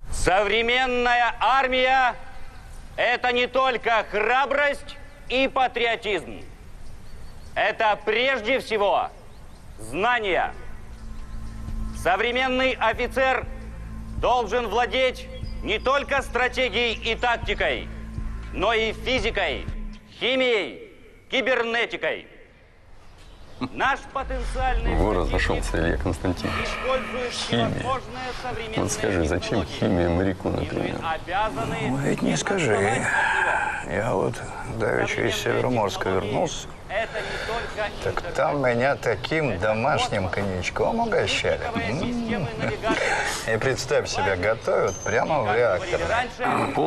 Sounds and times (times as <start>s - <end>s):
Speech: 23.8s - 46.8s.